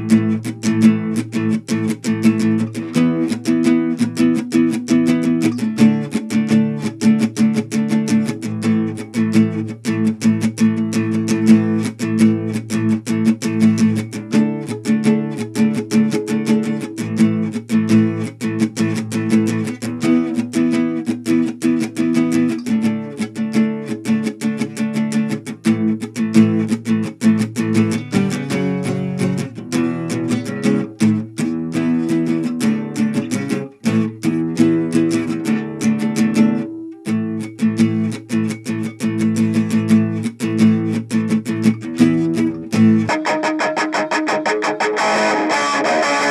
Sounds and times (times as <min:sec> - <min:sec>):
Acoustic guitar: 0:00.0 - 0:46.3.